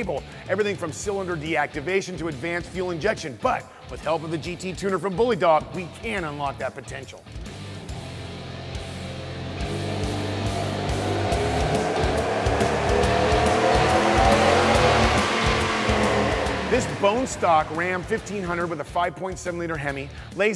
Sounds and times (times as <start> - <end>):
Speech: 0.0 - 7.3, 16.7 - 20.5
Music: 0.0 - 20.5.